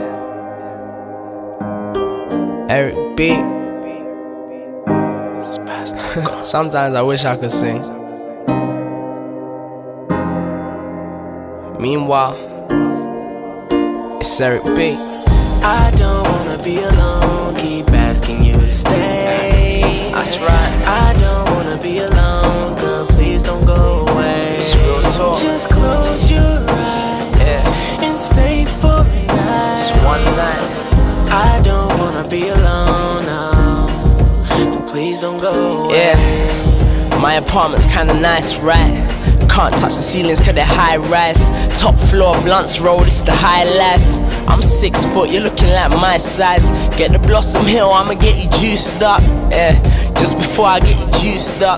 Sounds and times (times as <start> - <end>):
Music: 0.0 - 51.7.